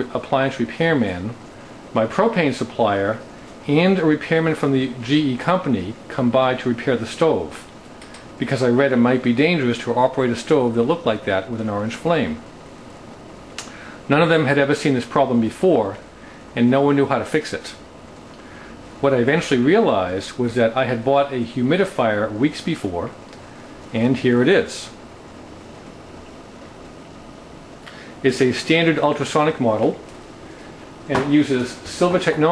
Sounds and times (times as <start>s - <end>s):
Speech: 0.0s - 7.7s, 8.4s - 12.4s, 14.1s - 17.9s, 19.0s - 23.2s, 23.9s - 25.0s, 28.2s - 30.0s, 31.1s - 32.5s.